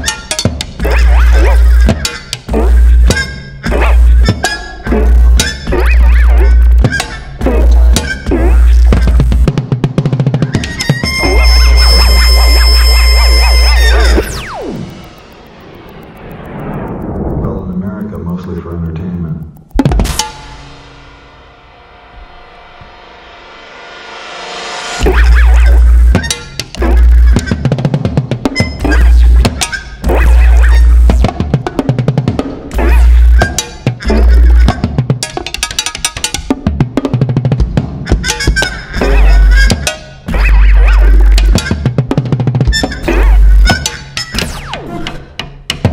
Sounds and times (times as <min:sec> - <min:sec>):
Speech: 0:17.4 - 0:19.5.